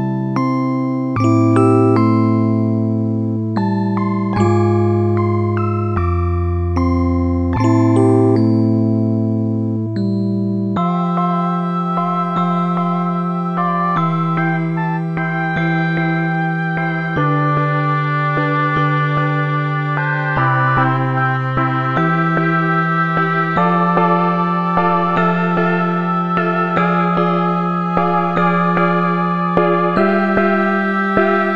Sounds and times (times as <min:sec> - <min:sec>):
Music: 0:00.0 - 0:31.5.